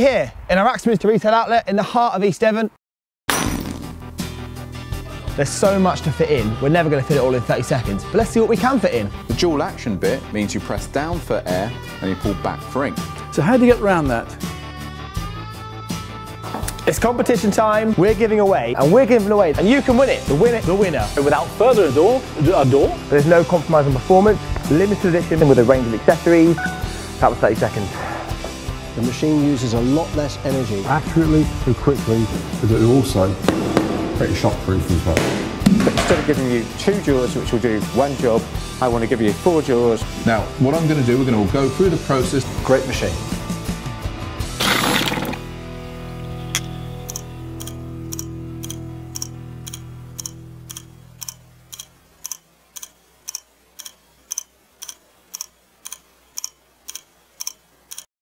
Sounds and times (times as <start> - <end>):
Speech: 0.0 - 2.8, 5.4 - 14.4, 16.8 - 26.6, 27.2 - 28.0, 29.0 - 33.4, 34.2 - 43.2
Music: 3.4 - 51.7.